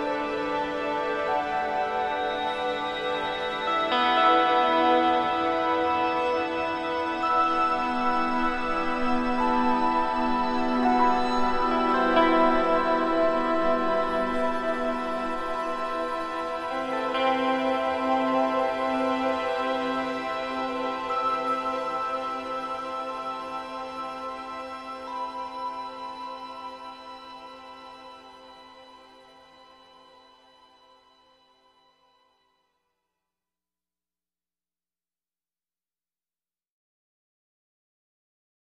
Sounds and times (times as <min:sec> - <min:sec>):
Background music: 0:00.0 - 0:31.6.